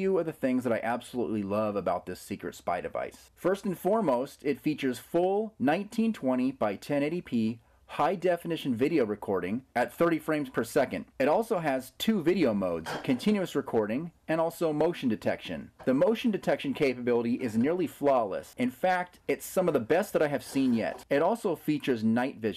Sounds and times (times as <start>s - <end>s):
Speech: 0.0s - 22.5s.